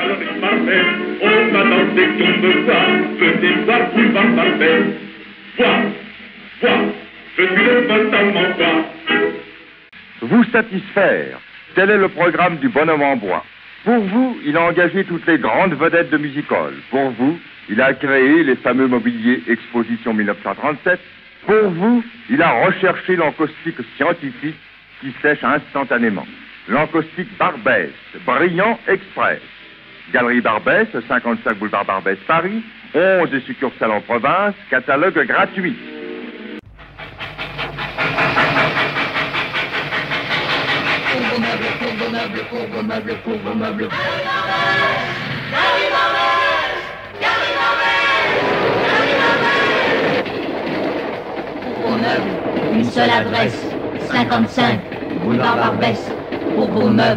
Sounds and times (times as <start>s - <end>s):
Music: 0.0s - 9.9s, 35.5s - 50.0s
Speech: 10.2s - 29.5s, 30.1s - 35.8s, 41.1s - 45.0s, 51.7s - 57.1s.